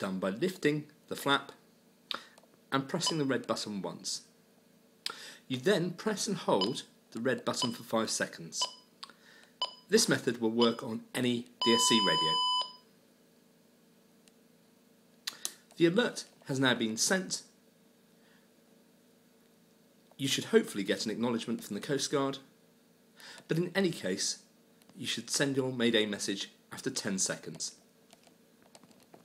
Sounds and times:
Speech: 0:00.0 - 0:01.6, 0:02.7 - 0:04.3, 0:05.5 - 0:08.7, 0:09.9 - 0:12.4, 0:15.8 - 0:17.6, 0:20.2 - 0:22.5, 0:23.5 - 0:27.8.

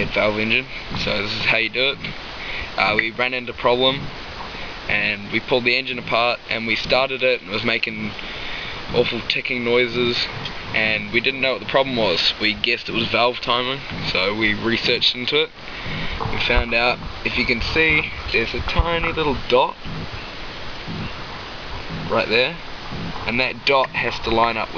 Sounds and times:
Speech: 0:00.0 - 0:04.1, 0:04.9 - 0:08.2, 0:08.9 - 0:15.5, 0:16.2 - 0:19.8, 0:22.0 - 0:22.6, 0:23.3 - 0:24.7.

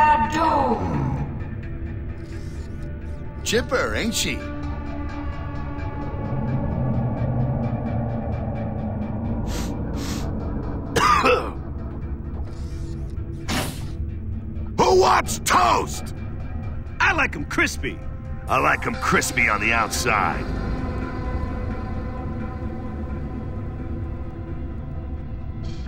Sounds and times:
Music: 0:00.0 - 0:25.8
Speech: 0:17.0 - 0:20.4.

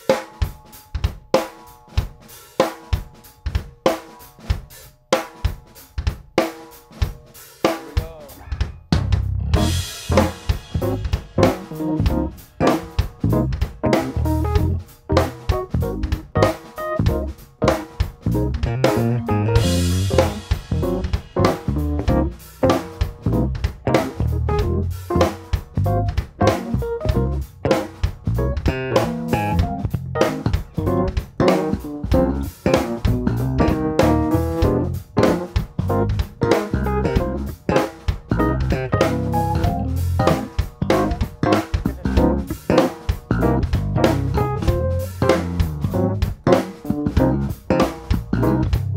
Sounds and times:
Drum: 0:00.0 - 0:48.9.

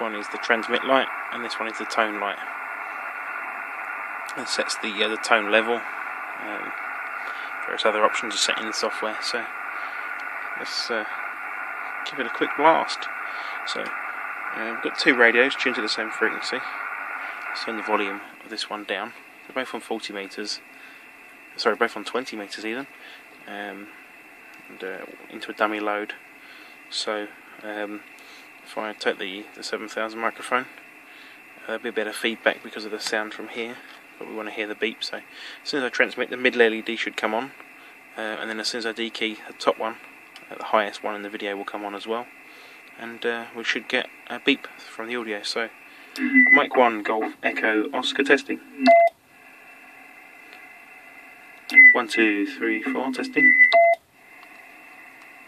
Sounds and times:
Speech: 0:00.0 - 0:02.5, 0:04.3 - 0:05.8, 0:06.4 - 0:06.8, 0:07.6 - 0:09.5, 0:10.6 - 0:11.2, 0:12.1 - 0:14.0, 0:14.6 - 0:16.7, 0:17.6 - 0:20.6, 0:21.6 - 0:22.9, 0:23.5 - 0:23.9, 0:24.7 - 0:26.2, 0:26.9 - 0:28.0, 0:28.7 - 0:30.7, 0:31.6 - 0:37.6, 0:38.2 - 0:42.3, 0:43.0 - 0:48.9, 0:51.7 - 0:53.7.

